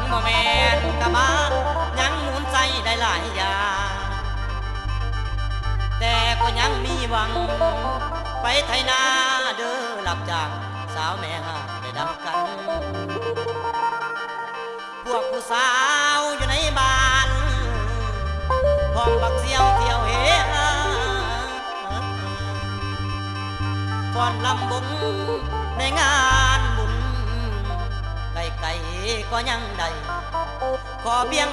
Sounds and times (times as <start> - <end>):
Music: 0.0 - 31.5.